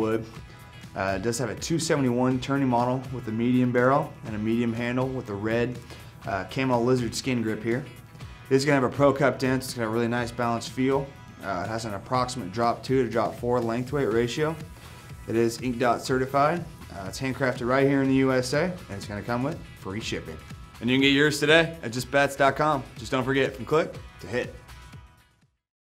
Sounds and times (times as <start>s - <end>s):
Speech: 0.0s - 0.3s, 1.0s - 7.9s, 8.5s - 14.7s, 15.3s - 24.6s
Music: 0.0s - 25.7s.